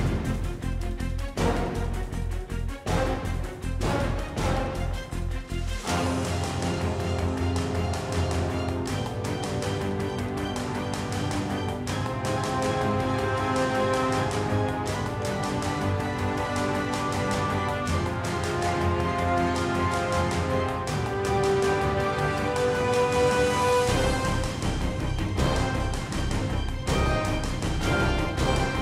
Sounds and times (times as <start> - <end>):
Theme music: 0.0 - 28.8.